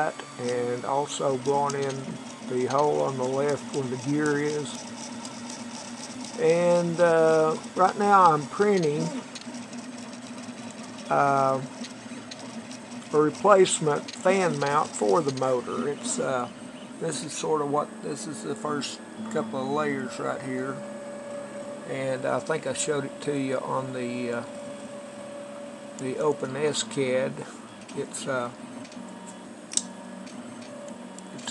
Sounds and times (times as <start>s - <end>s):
Speech: 0.0s - 4.8s, 6.4s - 9.2s, 11.1s - 11.7s, 13.2s - 20.8s, 21.9s - 24.5s, 26.0s - 28.6s
Printer: 0.0s - 31.5s.